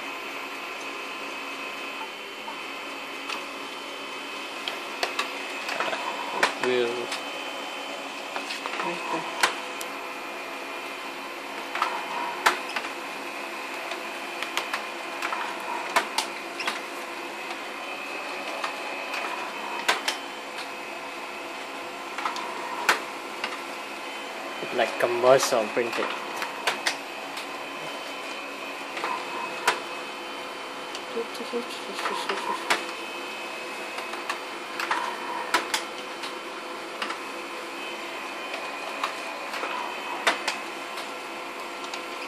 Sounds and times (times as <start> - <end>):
Printer: 0.0 - 42.2
Speech: 6.6 - 7.1, 24.6 - 26.1, 31.1 - 32.6.